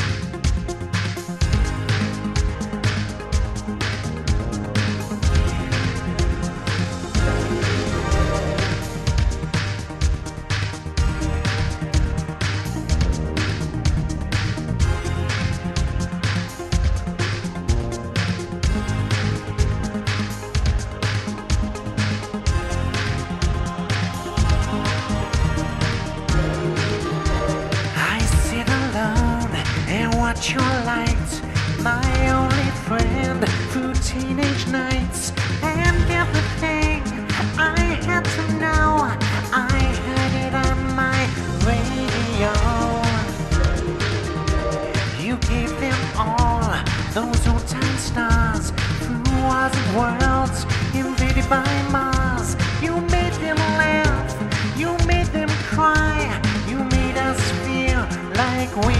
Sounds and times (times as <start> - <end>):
Music: 0.0 - 58.9.